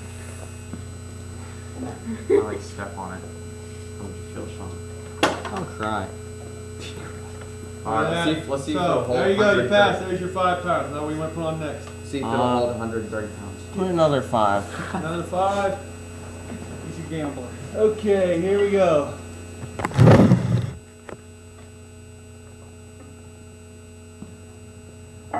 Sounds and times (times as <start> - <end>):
Speech: 7.8 - 15.9, 16.8 - 19.2.